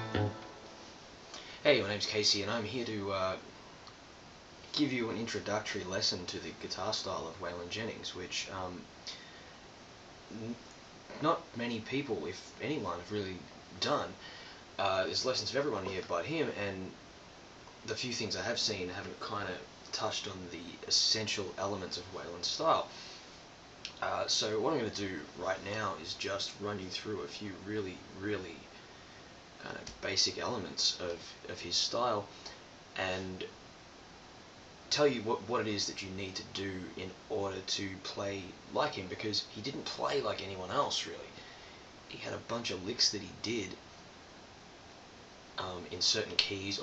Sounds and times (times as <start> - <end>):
Speech: 1.6 - 3.5, 4.7 - 8.9, 10.3 - 14.2, 14.8 - 17.0, 17.8 - 23.0, 23.9 - 28.7, 29.6 - 32.4, 33.0 - 33.6, 34.9 - 41.4, 42.1 - 43.8, 45.6 - 46.8.